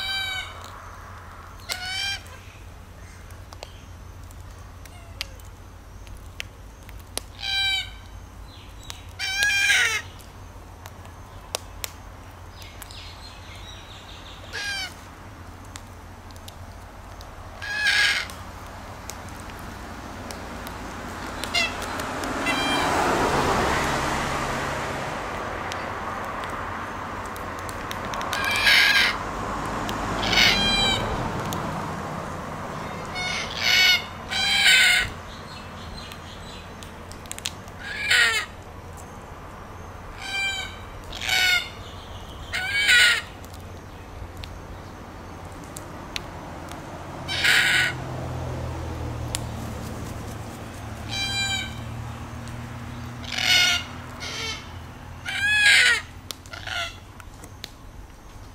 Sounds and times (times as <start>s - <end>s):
Bird: 0.0s - 10.3s, 30.2s - 31.1s, 32.8s - 39.2s, 39.8s - 45.6s, 52.9s - 58.5s.